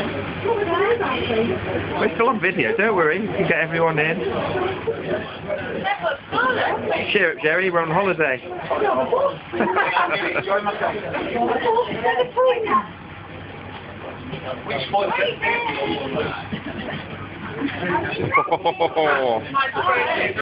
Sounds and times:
Vehicle: 0:00.0 - 0:20.4.

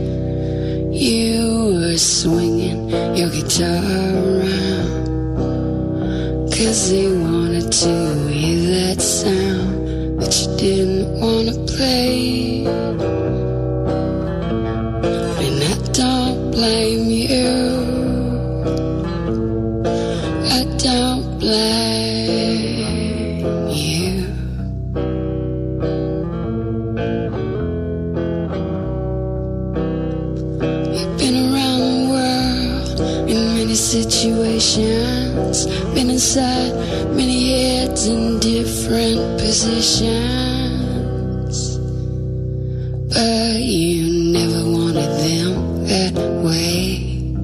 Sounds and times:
Music: 0:00.0 - 0:47.4.

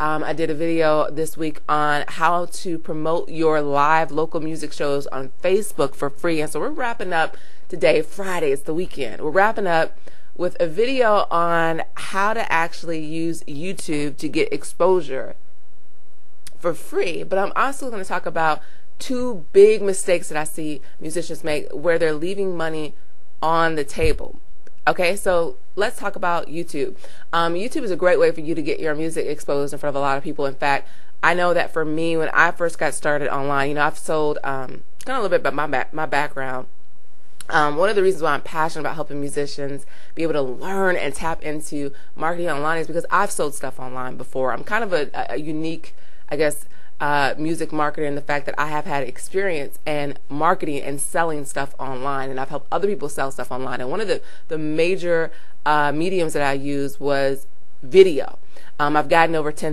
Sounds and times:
Speech: 0:00.0 - 0:15.4, 0:16.5 - 0:36.7, 0:37.4 - 0:59.7.

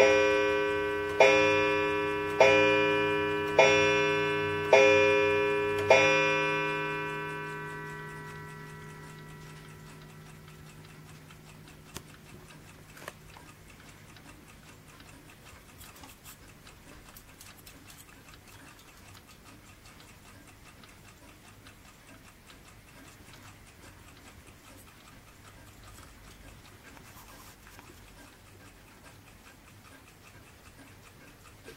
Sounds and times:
Tick-tock: 0:00.0 - 0:31.7.

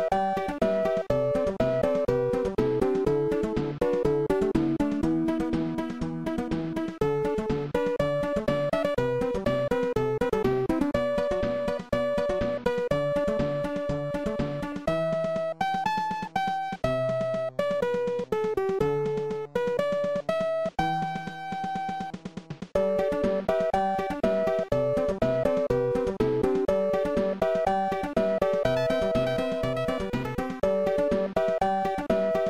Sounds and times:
Music: 0:00.0 - 0:32.5.

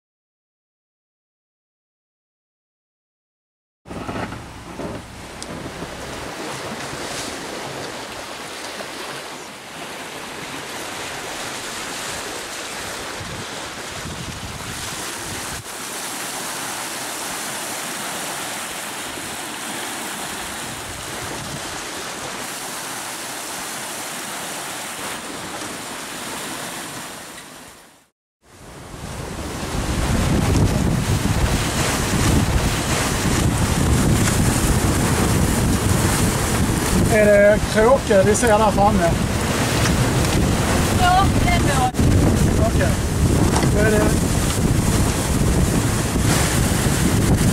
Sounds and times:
Sailboat, sailing ship: 0:03.9 - 0:47.5
Wind: 0:03.9 - 0:47.5.

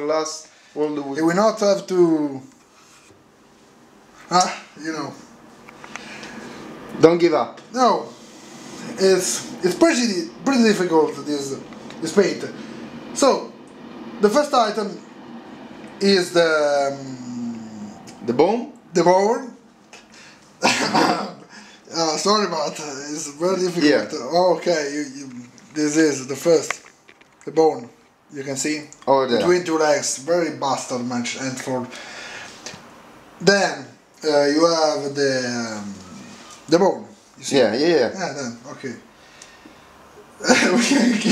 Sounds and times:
Speech: 0:00.0 - 0:02.5, 0:04.3 - 0:05.2, 0:07.0 - 0:08.2, 0:08.9 - 0:12.6, 0:13.2 - 0:13.6, 0:14.2 - 0:15.0, 0:16.0 - 0:19.6, 0:20.9 - 0:26.8, 0:27.4 - 0:31.9, 0:33.4 - 0:39.1, 0:40.4 - 0:41.3
Inside, small room: 0:00.0 - 0:41.3.

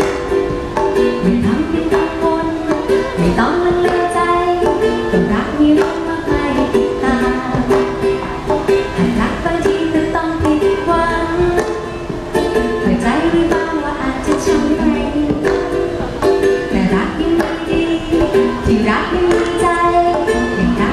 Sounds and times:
Inside, large room or hall: 0:00.0 - 0:20.9
Ukulele: 0:00.0 - 0:20.9.

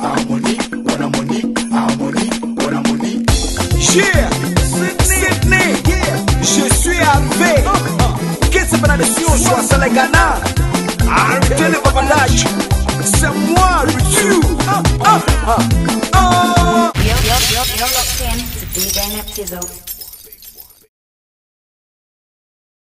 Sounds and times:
Music: 0:00.0 - 0:19.0.

